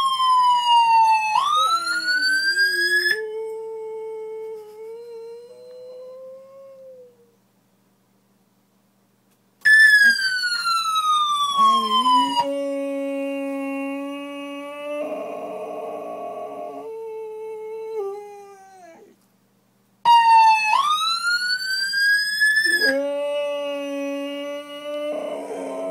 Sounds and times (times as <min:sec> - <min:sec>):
Ambulance (siren): 0:00.0 - 0:03.2, 0:09.7 - 0:12.5, 0:20.1 - 0:23.0
Howl: 0:00.0 - 0:07.4, 0:11.5 - 0:19.2, 0:22.4 - 0:25.9.